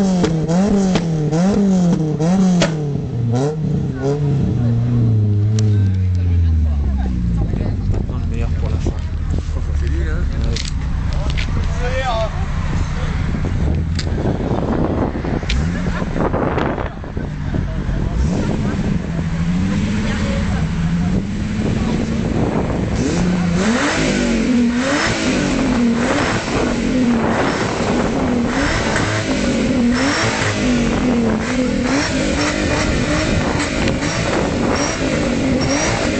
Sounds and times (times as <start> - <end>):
Speech: 3.9 - 13.3, 15.7 - 22.3.